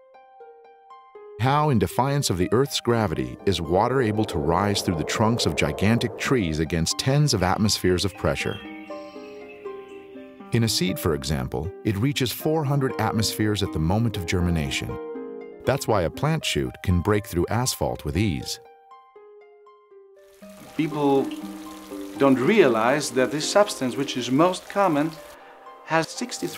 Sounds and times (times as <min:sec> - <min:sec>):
Music: 0:00.0 - 0:26.5
Speech: 0:01.4 - 0:08.6, 0:10.6 - 0:15.0, 0:15.7 - 0:18.6, 0:20.8 - 0:21.4, 0:22.2 - 0:25.2, 0:25.9 - 0:26.5
Water: 0:20.2 - 0:25.4.